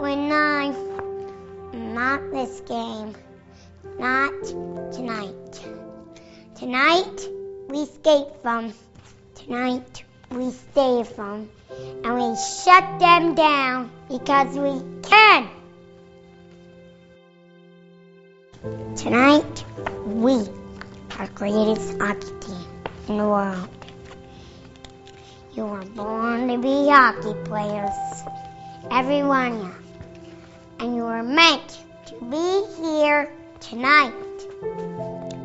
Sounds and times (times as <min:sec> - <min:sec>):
Narration, monologue: 0:00.0 - 0:16.7, 0:18.6 - 0:34.9.